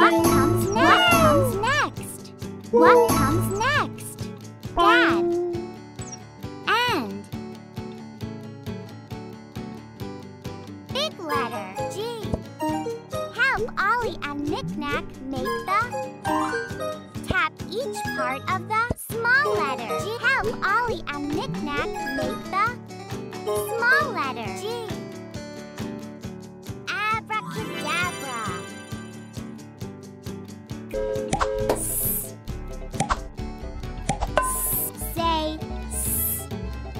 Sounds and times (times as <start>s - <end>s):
Speech: 0.0s - 4.2s, 4.8s - 5.6s, 6.7s - 7.2s, 10.9s - 12.4s, 13.3s - 15.9s, 17.2s - 22.8s, 23.5s - 25.0s, 26.9s - 28.7s, 34.5s - 36.4s
Music: 0.0s - 36.9s.